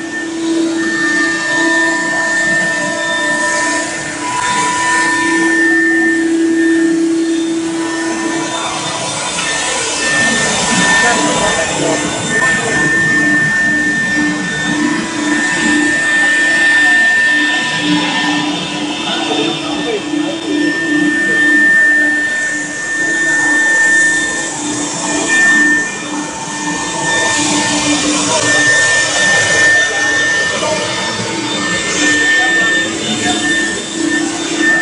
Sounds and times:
Speech: 9.5 - 13.2, 18.9 - 21.6.

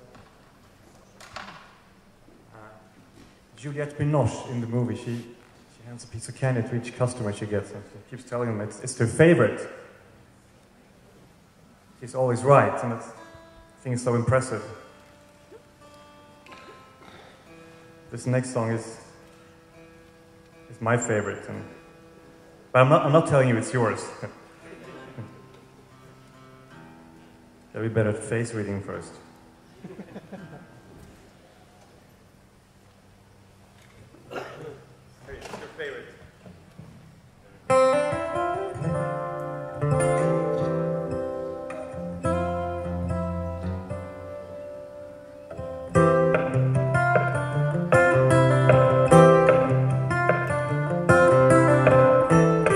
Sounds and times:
Speech: 3.6 - 9.7, 20.7 - 21.7, 22.8 - 25.4, 27.8 - 29.2, 34.6 - 36.2.

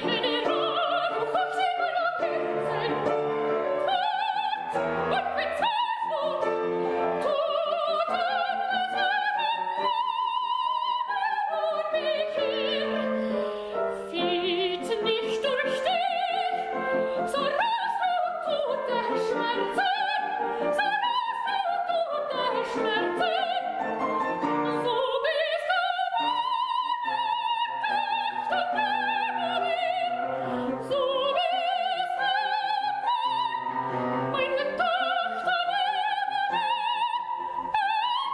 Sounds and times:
Music: 0.0 - 38.3.

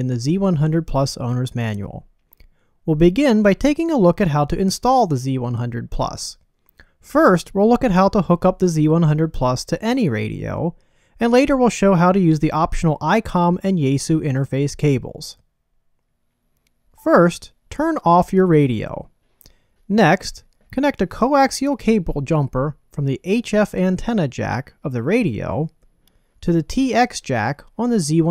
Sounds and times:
Speech: 0.0 - 2.1, 2.9 - 6.4, 7.0 - 15.4, 17.0 - 19.1, 19.9 - 25.8, 26.4 - 28.3.

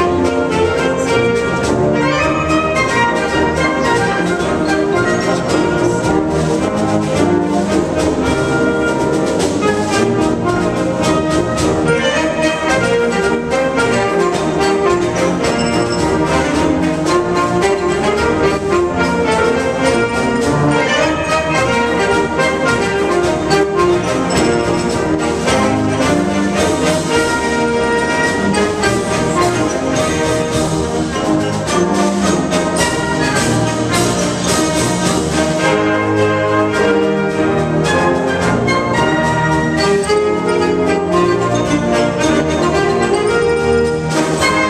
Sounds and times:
Orchestra: 0.0 - 44.7.

